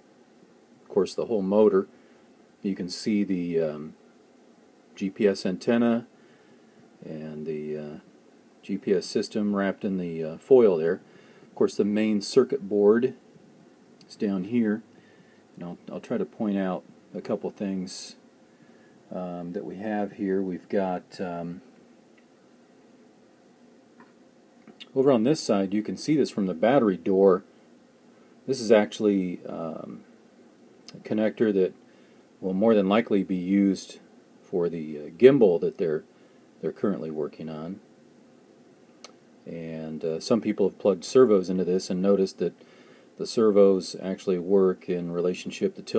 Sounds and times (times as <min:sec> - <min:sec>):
Speech: 0:00.9 - 0:01.9, 0:02.6 - 0:04.0, 0:05.0 - 0:06.1, 0:07.0 - 0:11.0, 0:11.6 - 0:13.2, 0:14.0 - 0:14.9, 0:15.6 - 0:18.2, 0:19.1 - 0:21.7, 0:24.8 - 0:27.5, 0:28.5 - 0:30.1, 0:30.9 - 0:31.8, 0:32.4 - 0:37.8, 0:39.4 - 0:42.6, 0:43.2 - 0:45.9.